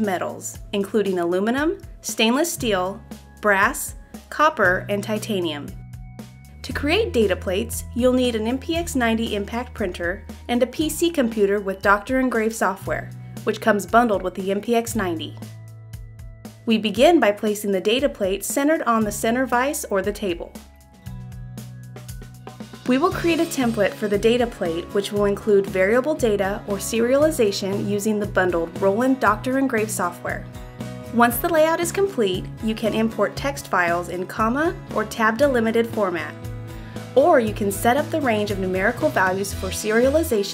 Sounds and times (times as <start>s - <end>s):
Speech: 0.0s - 5.8s, 6.6s - 15.4s, 16.7s - 20.6s, 22.9s - 30.4s, 31.1s - 36.4s, 37.2s - 40.5s
Music: 0.0s - 40.5s.